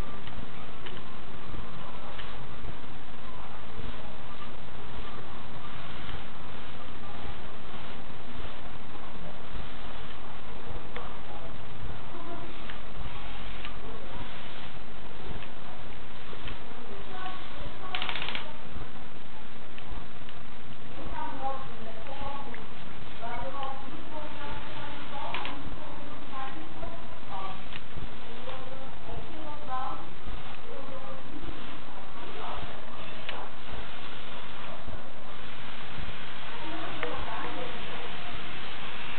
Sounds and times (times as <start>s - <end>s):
Speech: 0.0s - 39.1s.